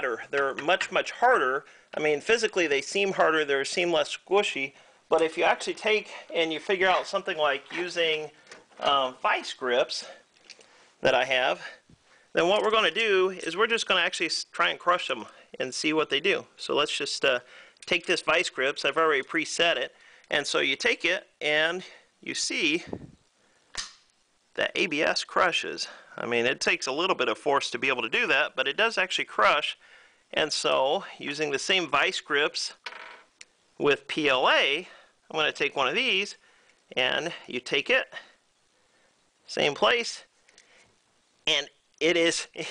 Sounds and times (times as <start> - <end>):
Speech: 0.0 - 10.2, 11.0 - 11.8, 12.4 - 23.0, 24.6 - 32.8, 33.8 - 38.4, 39.5 - 40.3, 41.5 - 42.7.